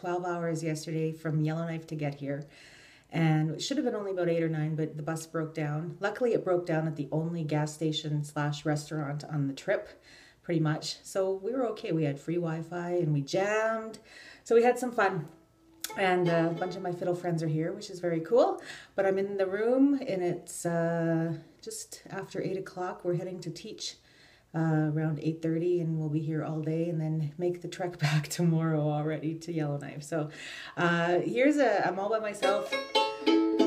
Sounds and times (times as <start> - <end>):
Speech: 0.0 - 2.5, 3.1 - 32.8.